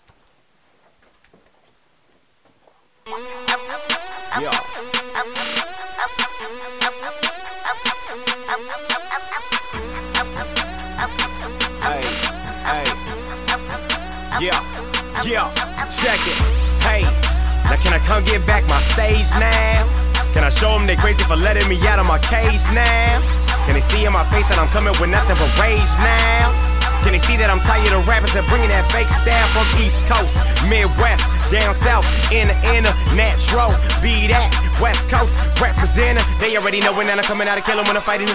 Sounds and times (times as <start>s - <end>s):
Music: 3.1s - 38.3s.